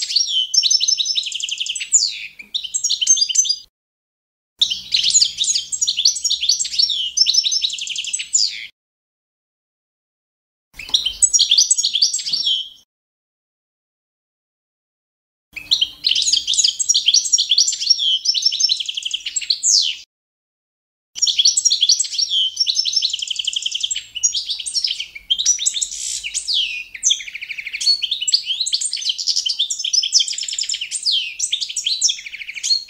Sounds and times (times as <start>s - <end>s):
Bird vocalization, bird call, bird song: 0.0s - 3.7s, 4.6s - 8.8s, 10.8s - 12.9s, 15.6s - 20.1s, 21.2s - 32.8s.